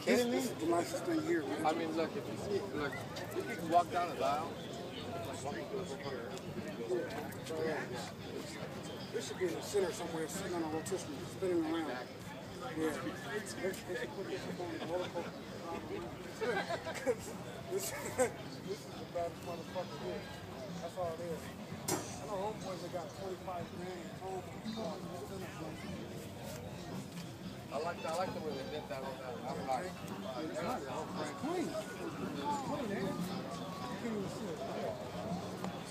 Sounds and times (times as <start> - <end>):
Speech: 0.0 - 35.9.